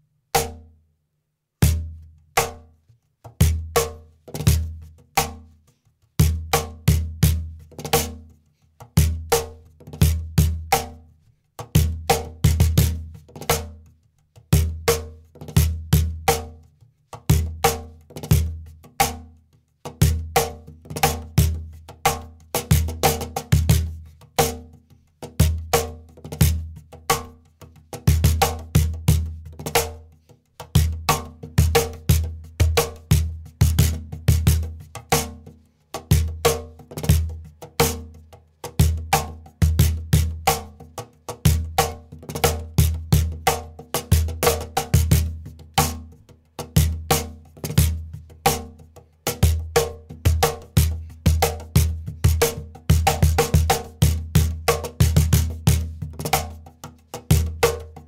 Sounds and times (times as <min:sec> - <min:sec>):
Percussion: 0:00.0 - 0:00.8, 0:01.6 - 0:58.0.